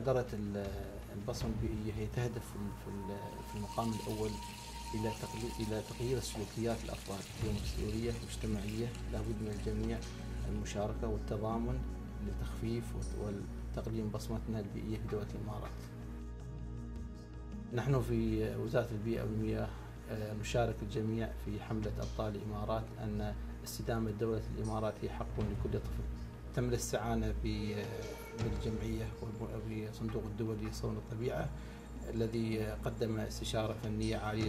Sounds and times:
Speech: 0:00.0 - 0:15.9, 0:17.7 - 0:34.4.

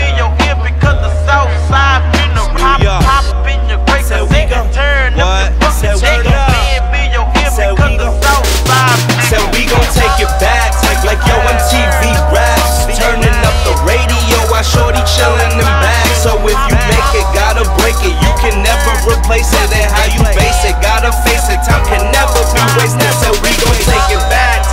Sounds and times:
Dance music: 0:00.0 - 0:24.7.

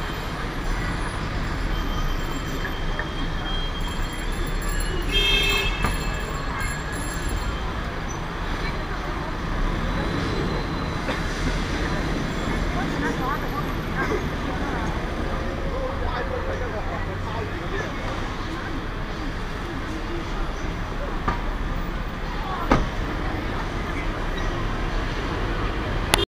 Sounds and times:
Car: 0:00.0 - 0:26.2
Speech: 0:11.7 - 0:26.2.

